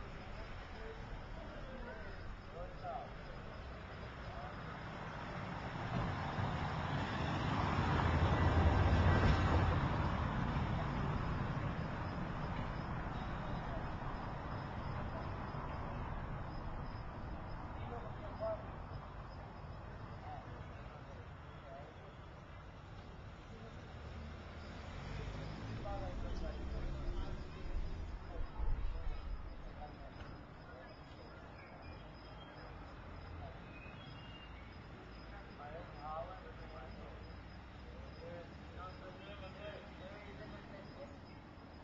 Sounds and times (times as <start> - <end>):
Speech: 0.0 - 5.4, 17.6 - 19.0, 20.0 - 24.1, 25.1 - 34.1, 34.9 - 41.8
Car: 0.0 - 31.4, 34.7 - 41.8.